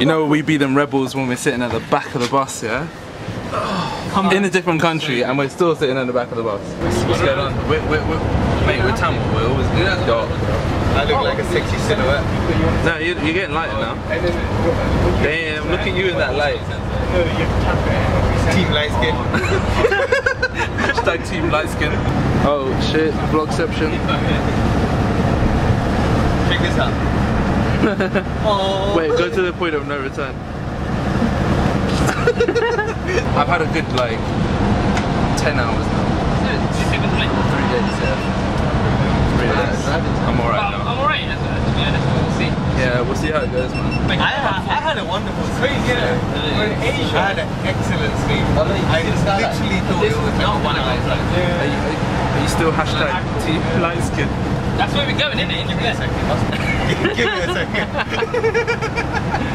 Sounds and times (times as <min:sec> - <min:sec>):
Bus: 0:00.0 - 0:59.5.